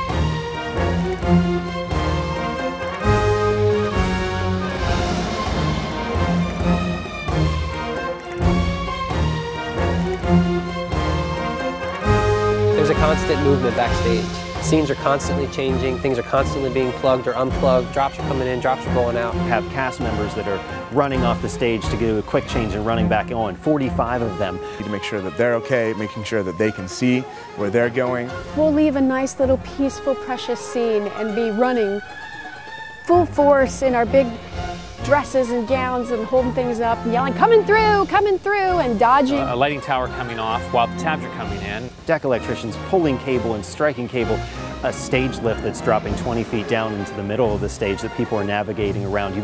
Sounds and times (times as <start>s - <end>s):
Music: 0.0s - 49.4s.